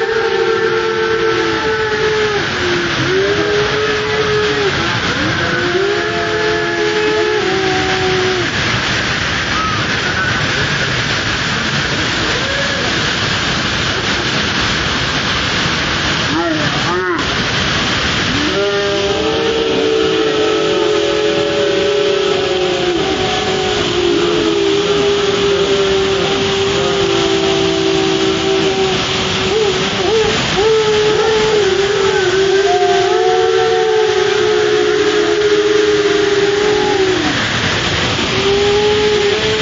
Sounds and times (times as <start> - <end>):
Waterfall: 0.0 - 39.6.